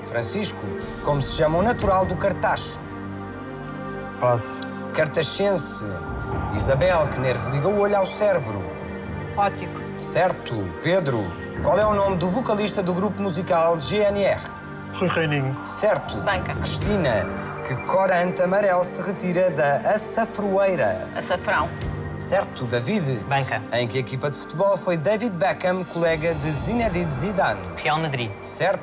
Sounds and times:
Music: 0.0 - 28.8.

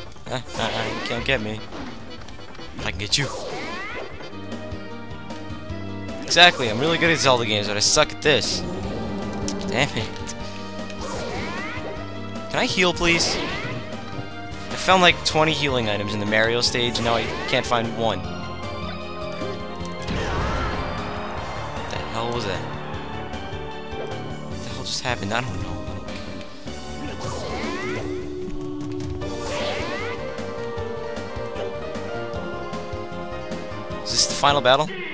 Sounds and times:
Music: 0.0 - 35.1
Speech: 6.3 - 8.6, 12.5 - 13.4, 14.8 - 18.2, 24.7 - 25.8, 34.1 - 35.0.

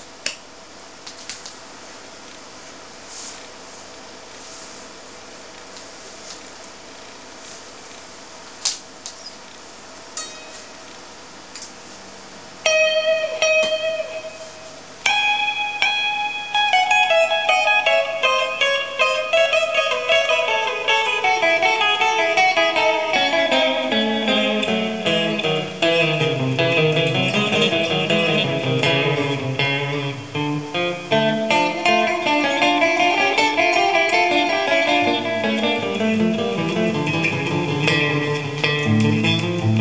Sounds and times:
Electric guitar: 12.6 - 39.8.

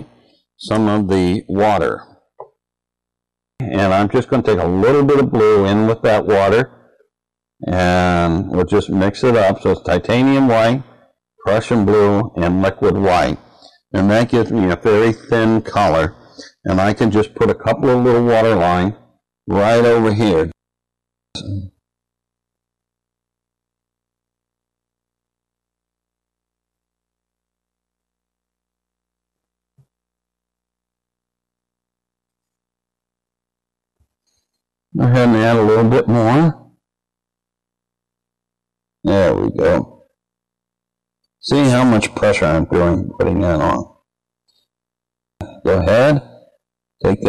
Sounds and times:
Speech: 0.0 - 2.2, 3.6 - 6.8, 7.6 - 20.6, 21.4 - 21.8, 35.0 - 36.7, 39.0 - 40.0, 41.4 - 44.0, 45.4 - 46.4, 47.0 - 47.2.

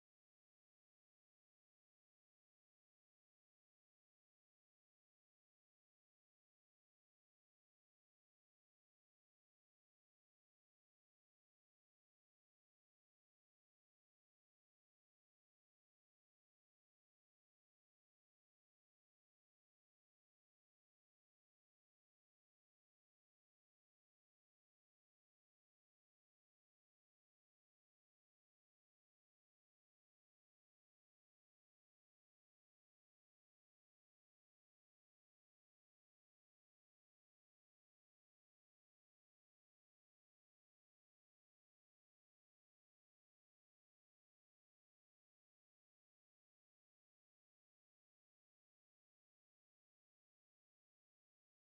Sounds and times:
Silence: 0.0 - 51.6.

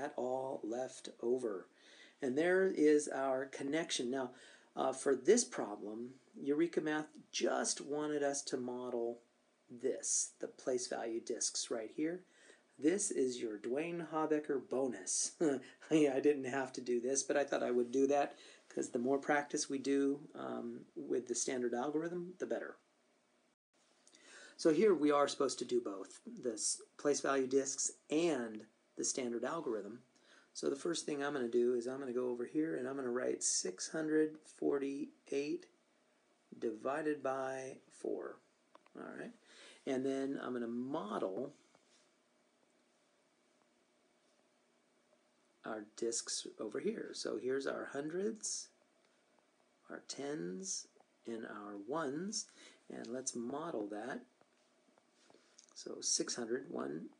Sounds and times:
Speech: 0.0 - 22.8, 24.6 - 35.7, 36.5 - 41.6, 45.6 - 48.8, 49.9 - 54.3, 55.7 - 57.1.

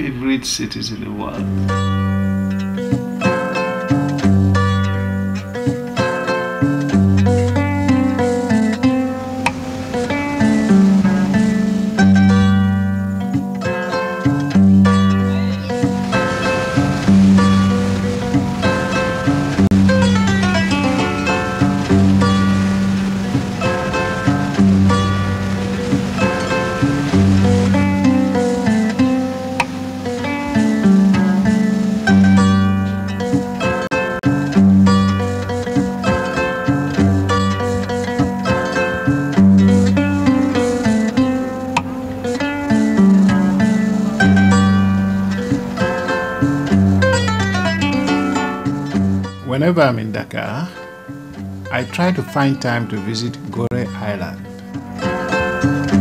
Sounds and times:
Music: 0.0 - 56.0.

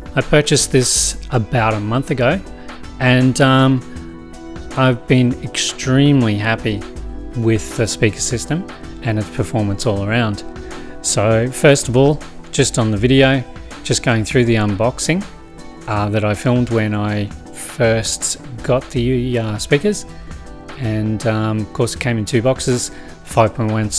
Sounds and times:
Music: 0.0 - 23.9
Speech: 0.2 - 2.4, 3.0 - 3.9, 4.7 - 15.3, 15.9 - 20.1, 20.8 - 23.9.

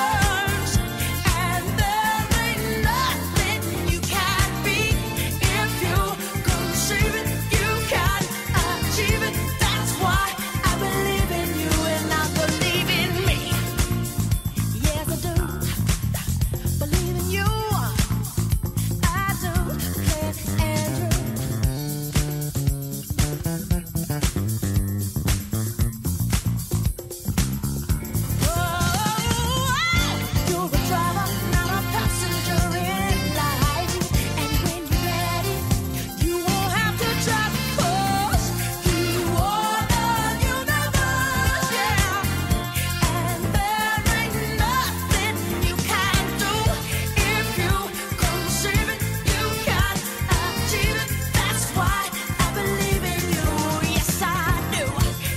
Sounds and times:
Singing: 0.0 - 18.2, 28.4 - 55.3
Music: 0.0 - 55.3.

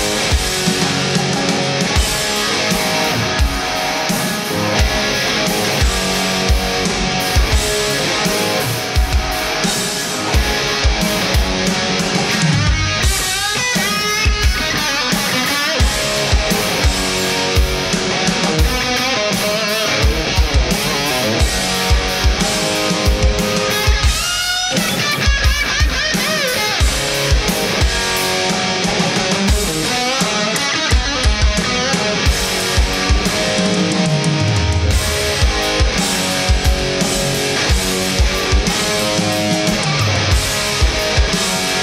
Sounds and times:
Drum kit: 0.0 - 41.8
Rimshot: 0.0 - 41.8.

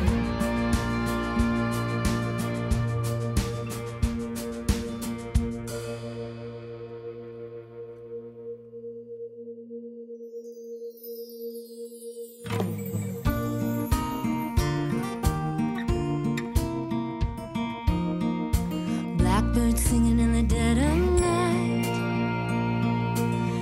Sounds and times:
Music: 0.0 - 23.6.

